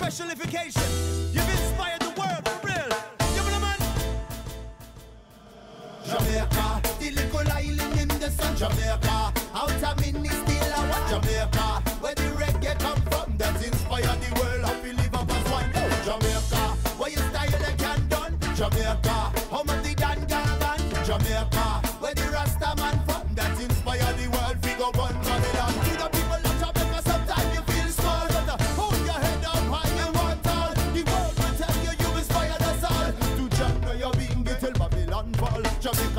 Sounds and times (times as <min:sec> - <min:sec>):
Funk: 0:06.1 - 0:36.1.